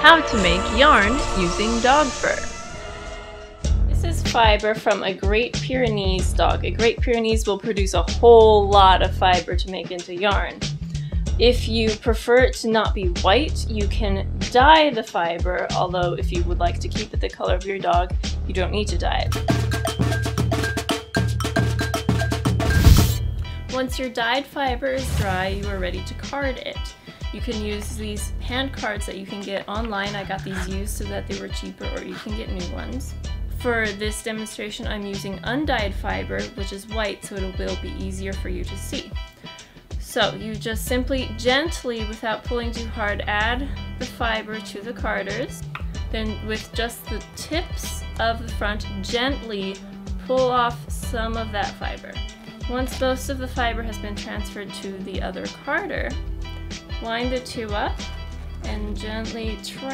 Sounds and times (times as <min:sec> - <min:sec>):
Speech: 0:00.0 - 0:02.4, 0:03.9 - 0:10.6, 0:11.4 - 0:19.3, 0:23.7 - 0:39.1, 0:40.0 - 0:56.2, 0:57.0 - 0:58.0, 0:58.6 - 0:59.9
Music: 0:00.0 - 0:59.9.